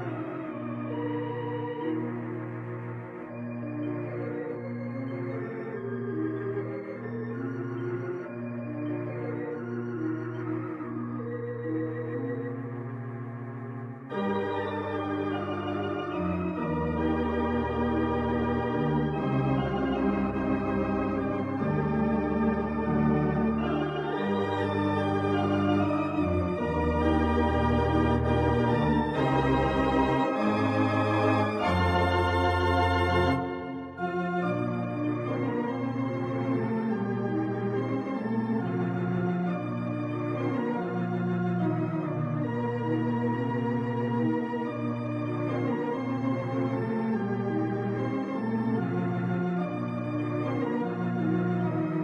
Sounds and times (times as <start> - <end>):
Electronic organ: 0.0 - 52.0.